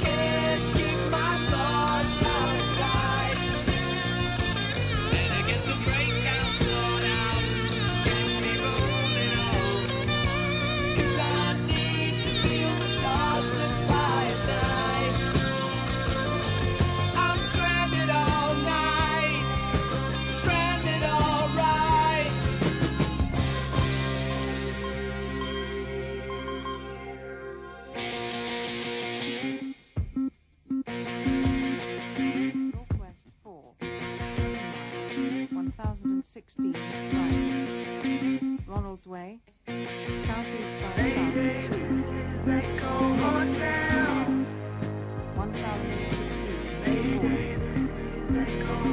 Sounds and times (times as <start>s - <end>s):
Music: 0.0s - 48.9s
Speech: 32.8s - 33.7s, 35.4s - 37.6s, 38.7s - 39.5s, 40.2s - 41.4s, 45.4s - 46.7s.